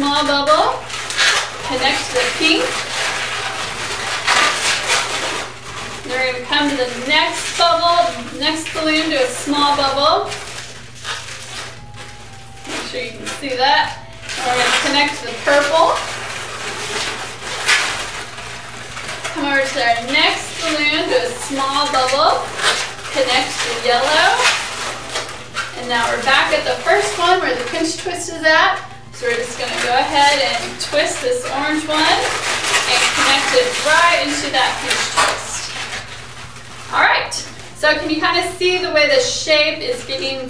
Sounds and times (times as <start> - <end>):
Speech: 0.0 - 0.8, 1.6 - 2.8, 6.1 - 10.4, 12.7 - 16.1, 19.4 - 22.5, 23.2 - 24.6, 25.8 - 35.8, 36.9 - 40.4
Music: 0.0 - 40.4.